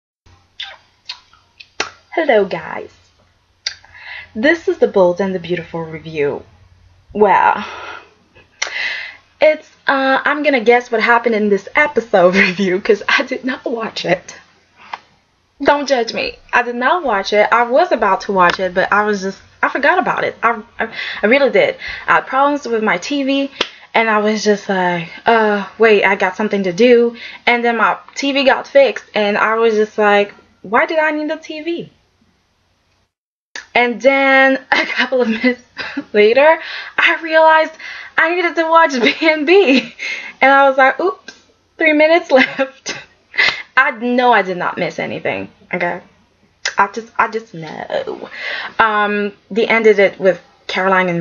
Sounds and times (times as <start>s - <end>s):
Inside, small room: 0.3s - 51.2s
Speech: 2.1s - 2.9s, 4.4s - 6.4s, 7.2s - 7.7s, 9.4s - 14.4s, 15.6s - 31.9s, 33.6s - 43.0s, 43.8s - 46.0s, 46.7s - 51.2s.